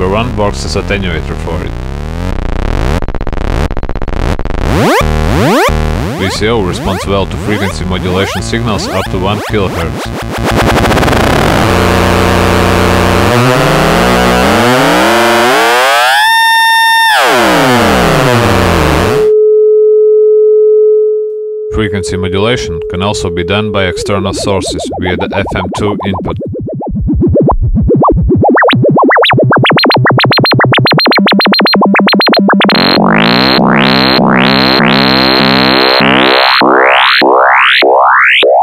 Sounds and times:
Speech: 0:00.0 - 0:01.8, 0:06.2 - 0:10.1, 0:21.7 - 0:26.4
Synthesizer: 0:21.7 - 0:38.6.

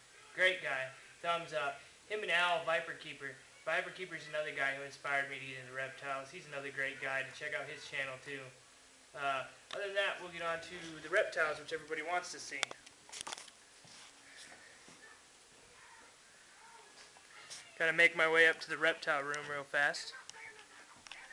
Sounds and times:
Speech: 0:00.3 - 0:08.6, 0:09.2 - 0:12.7, 0:15.0 - 0:21.3.

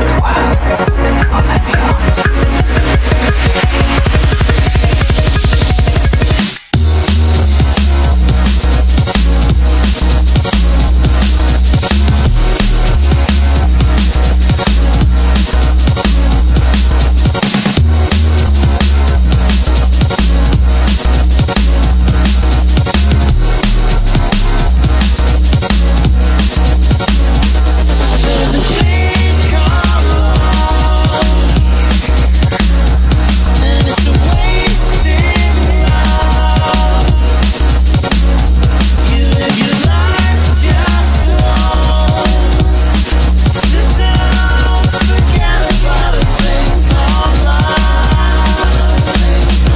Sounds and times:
Drum and bass: 0:00.0 - 0:49.7.

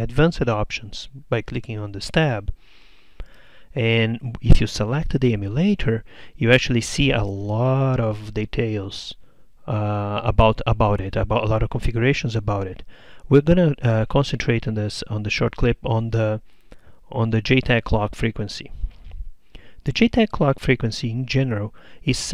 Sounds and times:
Speech: 0:00.0 - 0:02.6, 0:03.8 - 0:16.4, 0:17.1 - 0:18.8, 0:19.8 - 0:22.3.

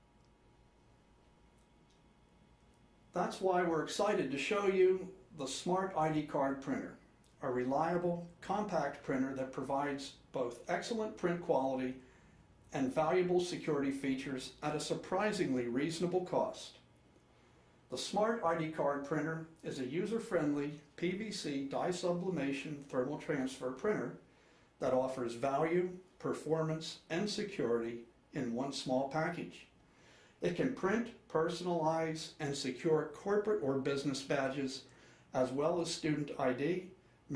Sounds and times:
Speech: 0:03.1 - 0:12.0, 0:12.7 - 0:16.8, 0:17.9 - 0:24.2, 0:24.8 - 0:29.8, 0:30.4 - 0:37.3.

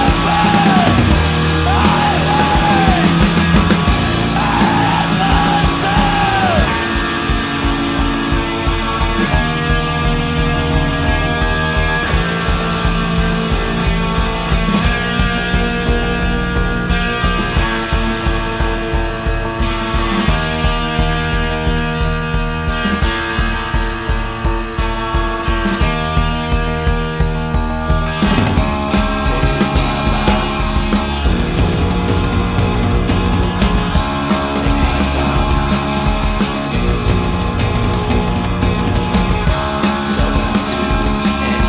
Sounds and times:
Progressive rock: 0:00.0 - 0:41.6.

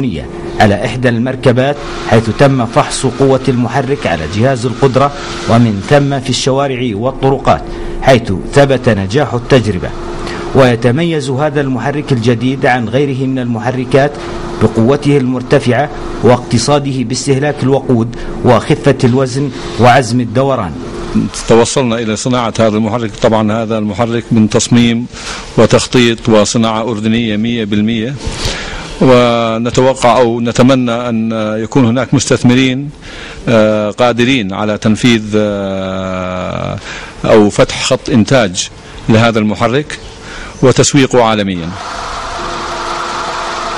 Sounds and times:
Speech: 0:00.0 - 0:28.2, 0:29.0 - 0:40.0, 0:40.6 - 0:41.8
Heavy engine (low frequency): 0:01.3 - 0:06.3, 0:07.6 - 0:10.6, 0:14.1 - 0:14.9.

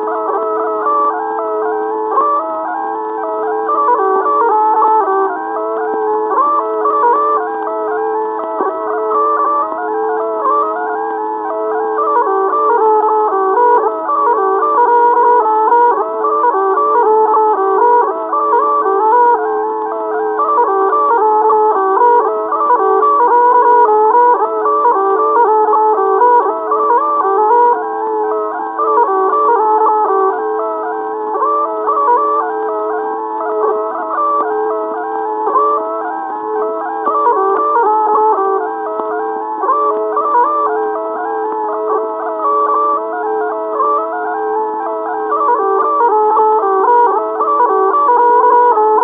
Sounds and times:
Bagpipes: 0:00.0 - 0:49.0.

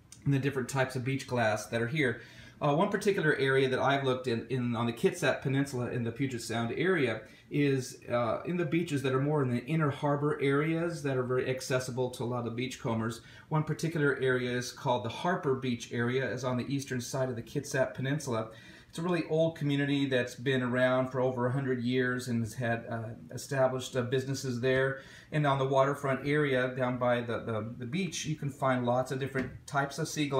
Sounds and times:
Speech: 0:00.2 - 0:30.3.

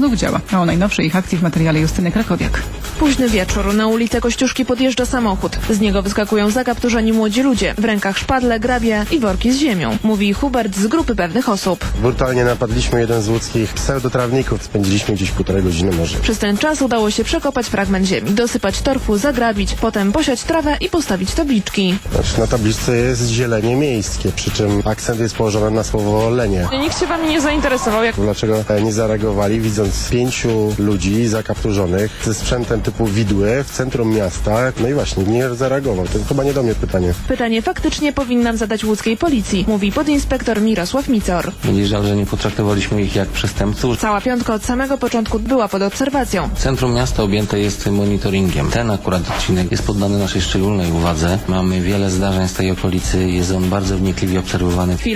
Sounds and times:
Music: 0:00.0 - 0:55.1
Speech: 0:00.0 - 0:55.1.

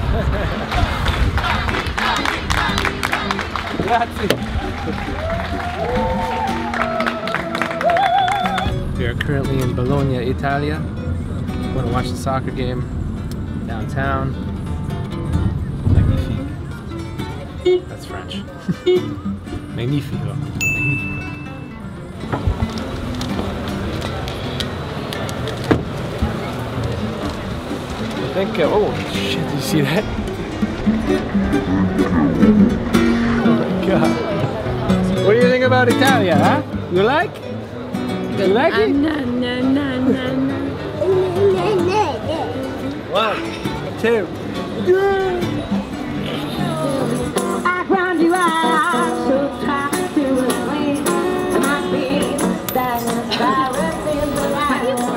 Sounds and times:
Music: 0:00.7 - 0:25.0, 0:25.6 - 0:55.1.

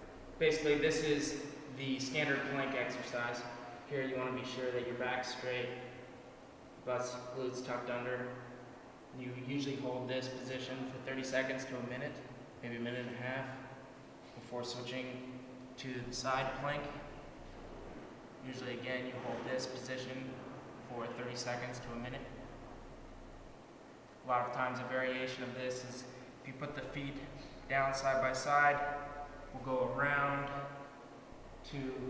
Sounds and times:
Inside, small room: 0:00.0 - 0:32.1
Speech: 0:00.4 - 0:06.0, 0:06.8 - 0:08.5, 0:09.2 - 0:13.8, 0:14.4 - 0:17.2, 0:18.4 - 0:22.4, 0:24.2 - 0:30.8, 0:31.6 - 0:32.1.

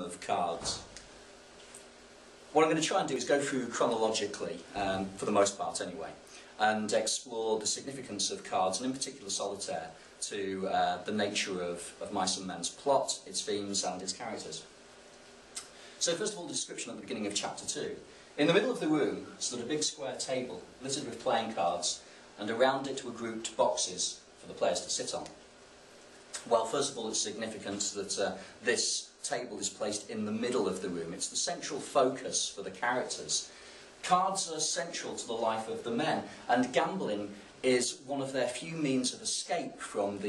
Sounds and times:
Speech: 0:00.0 - 0:01.0, 0:02.5 - 0:14.7, 0:16.0 - 0:25.4, 0:26.4 - 0:40.2.

